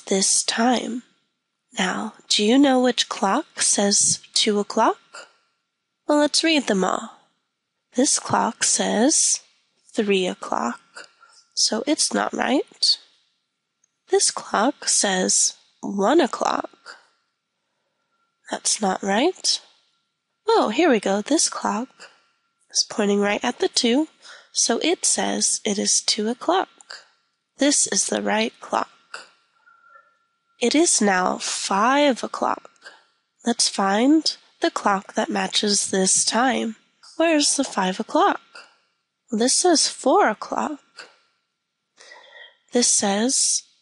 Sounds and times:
Speech: 0.0s - 1.0s, 1.8s - 5.3s, 6.1s - 7.2s, 8.0s - 9.4s, 10.0s - 13.0s, 14.1s - 17.0s, 18.5s - 19.6s, 20.5s - 22.1s, 22.8s - 27.0s, 27.6s - 28.9s, 30.6s - 32.9s, 33.5s - 38.6s, 39.3s - 41.1s, 42.0s - 43.6s.

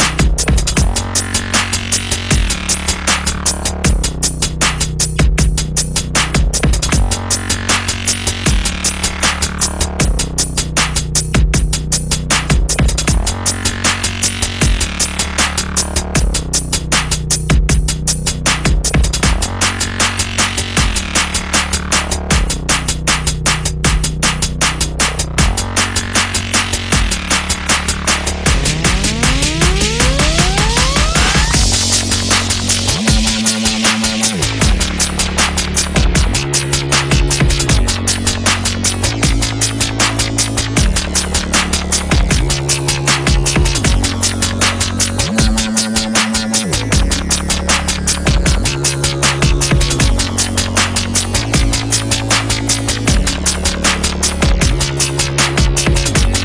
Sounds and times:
Dubstep: 0.0s - 56.4s.

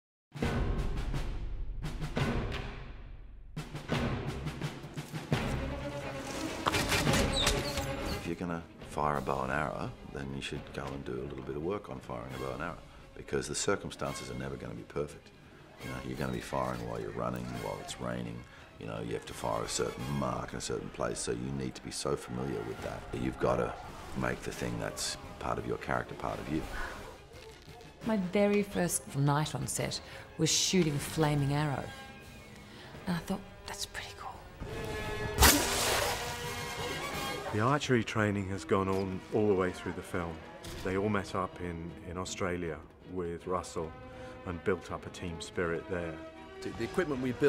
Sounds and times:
Music: 0.3s - 47.4s
Arrow: 35.4s - 36.4s.

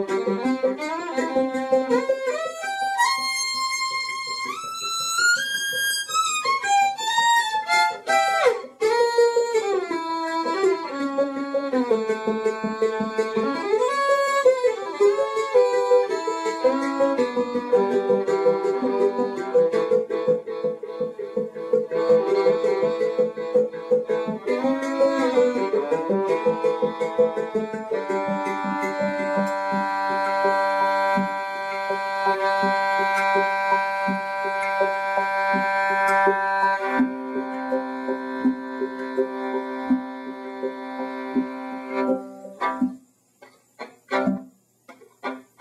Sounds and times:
Violin, fiddle: 0.0s - 43.0s, 43.8s - 45.6s.

